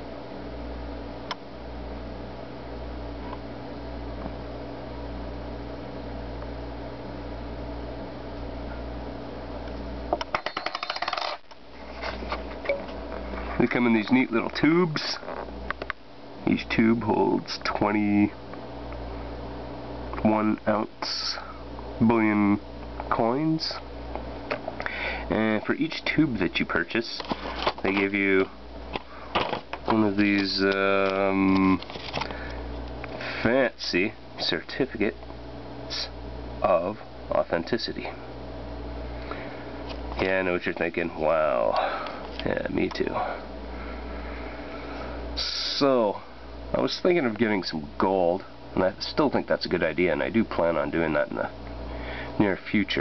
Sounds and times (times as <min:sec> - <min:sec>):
Coin (dropping): 0:10.3 - 0:11.4.